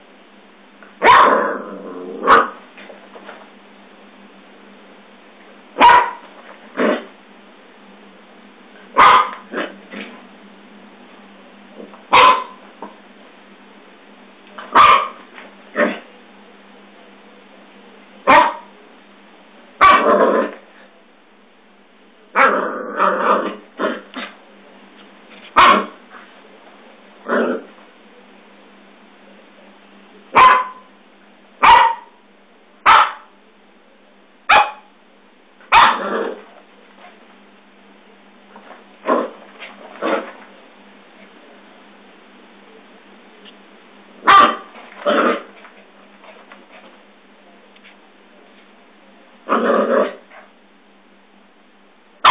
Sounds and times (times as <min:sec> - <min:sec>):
Yip: 0:01.0 - 0:01.4, 0:02.2 - 0:02.6, 0:05.8 - 0:06.2, 0:09.0 - 0:09.4, 0:12.1 - 0:12.6, 0:14.7 - 0:15.2, 0:18.3 - 0:18.7, 0:19.8 - 0:20.2, 0:25.6 - 0:26.0, 0:30.4 - 0:30.9, 0:31.6 - 0:32.2, 0:32.8 - 0:33.3, 0:34.5 - 0:34.9, 0:35.7 - 0:36.1, 0:44.2 - 0:44.7
Bow-wow: 0:01.0 - 0:02.6, 0:05.8 - 0:06.2, 0:09.0 - 0:09.8, 0:12.1 - 0:12.6, 0:14.7 - 0:15.2, 0:18.2 - 0:18.7, 0:19.8 - 0:20.6, 0:22.3 - 0:24.4, 0:25.6 - 0:26.0, 0:30.3 - 0:30.9, 0:31.6 - 0:32.2, 0:32.8 - 0:33.3, 0:34.5 - 0:34.9, 0:35.7 - 0:36.4, 0:44.2 - 0:45.5.